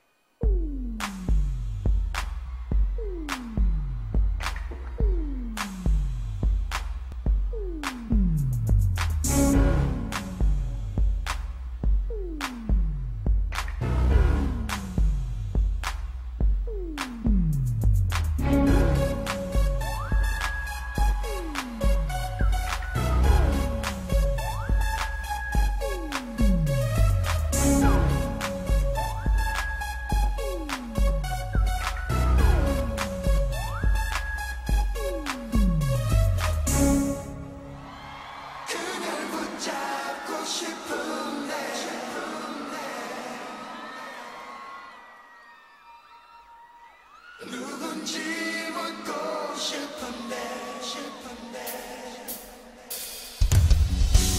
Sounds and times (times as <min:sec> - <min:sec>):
Music: 0:00.1 - 0:42.9, 0:52.3 - 0:54.3.